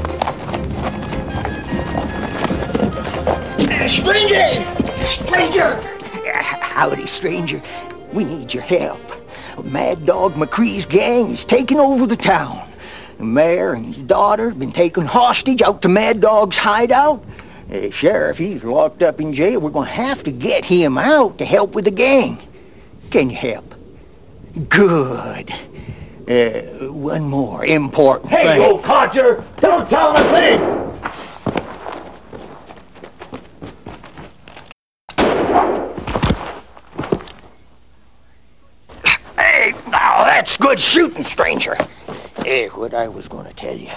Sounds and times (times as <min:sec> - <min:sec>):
Speech: 0:03.6 - 0:09.0, 0:09.6 - 0:22.4, 0:26.3 - 0:30.6, 0:39.1 - 0:43.9.